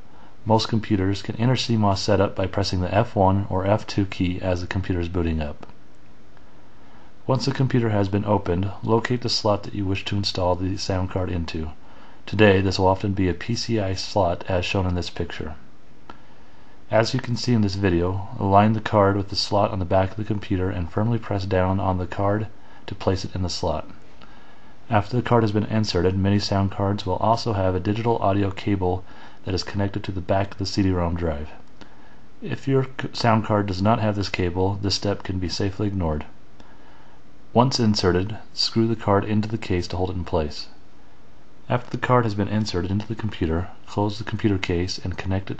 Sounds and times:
Speech: 0.4 - 5.8, 7.2 - 15.7, 16.9 - 24.0, 24.9 - 31.7, 32.4 - 36.4, 37.5 - 40.8, 41.6 - 45.5.

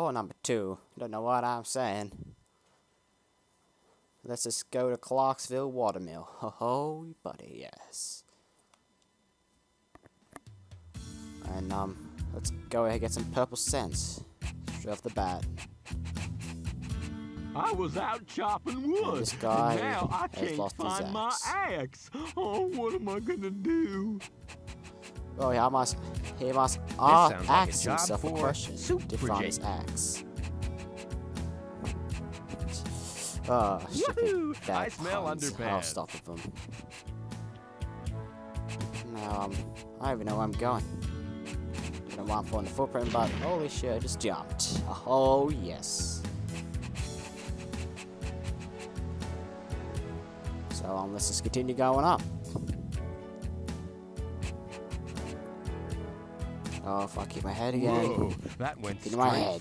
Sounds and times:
Speech: 0.0 - 2.2, 4.2 - 8.3, 11.4 - 15.4, 17.6 - 24.2, 25.4 - 30.2, 32.7 - 36.5, 39.0 - 40.8, 42.1 - 46.2, 50.7 - 52.2, 56.8 - 59.6
Music: 10.3 - 59.6.

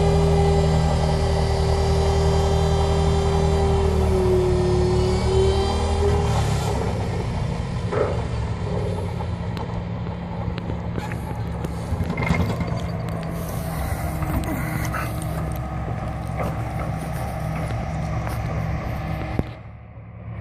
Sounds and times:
Vehicle: 0.0 - 20.4.

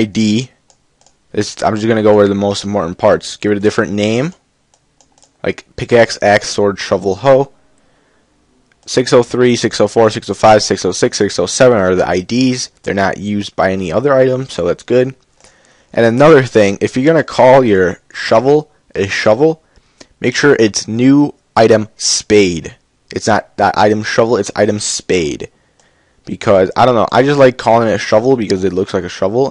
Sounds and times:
Speech: 0.0 - 0.6, 1.3 - 4.4, 5.4 - 7.6, 8.8 - 15.2, 15.9 - 19.6, 20.2 - 25.5, 26.3 - 29.5.

